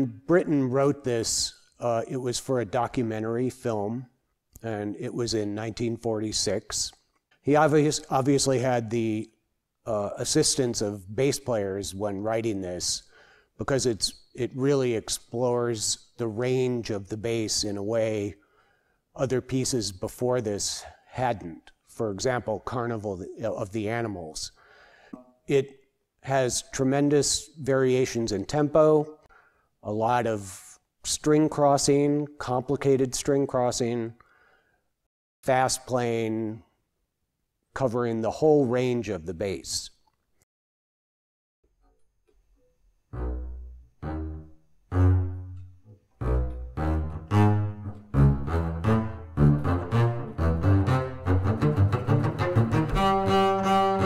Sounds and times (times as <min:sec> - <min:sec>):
Double bass: 0:43.0 - 0:54.0
Orchestra: 0:43.2 - 0:54.0.